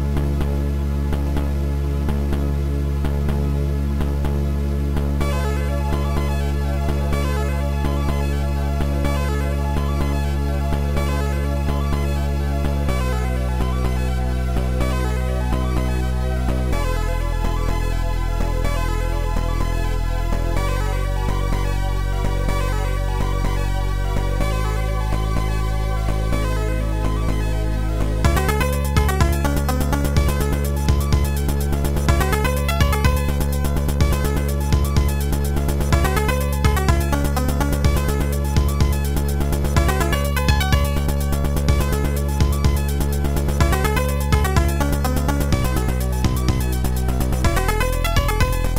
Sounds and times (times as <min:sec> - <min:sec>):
Theme music: 0:28.2 - 0:48.7.